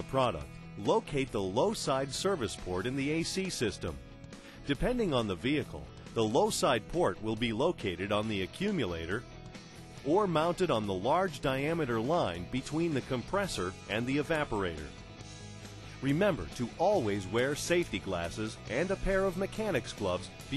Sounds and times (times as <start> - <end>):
Speech: 0.0 - 4.0, 4.7 - 9.2, 10.1 - 14.9, 16.0 - 20.5
Music: 0.0 - 20.5.